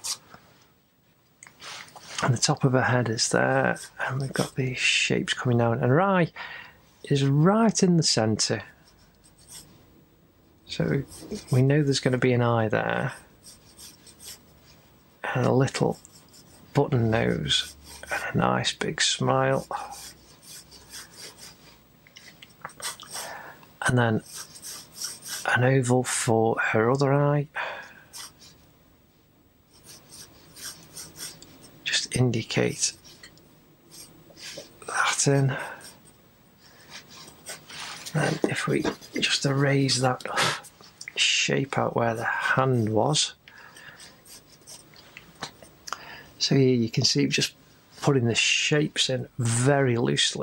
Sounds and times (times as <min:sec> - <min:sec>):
Inside, small room: 0:00.0 - 0:50.4
Speech: 0:02.2 - 0:06.4, 0:07.1 - 0:08.8, 0:10.7 - 0:13.3, 0:15.2 - 0:16.0, 0:16.7 - 0:20.0, 0:23.8 - 0:24.3, 0:25.4 - 0:27.6, 0:31.8 - 0:33.0, 0:34.8 - 0:35.9, 0:38.1 - 0:43.4, 0:46.4 - 0:50.4
Writing: 0:03.7 - 0:04.6, 0:08.8 - 0:09.7, 0:11.0 - 0:11.7, 0:13.0 - 0:14.8, 0:15.7 - 0:18.3, 0:19.5 - 0:21.7, 0:22.7 - 0:23.3, 0:24.2 - 0:25.6, 0:28.1 - 0:28.6, 0:29.7 - 0:31.7, 0:33.9 - 0:34.7, 0:37.1 - 0:39.4, 0:44.0 - 0:44.9.